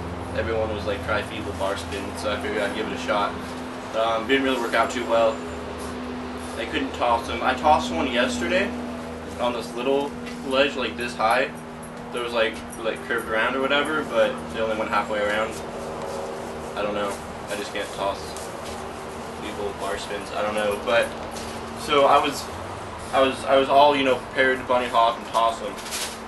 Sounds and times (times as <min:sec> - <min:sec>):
Speech: 0:00.3 - 0:05.4, 0:06.6 - 0:08.8, 0:09.4 - 0:11.5, 0:12.1 - 0:15.6, 0:16.8 - 0:18.4, 0:19.4 - 0:21.1, 0:21.8 - 0:22.5, 0:23.1 - 0:25.8.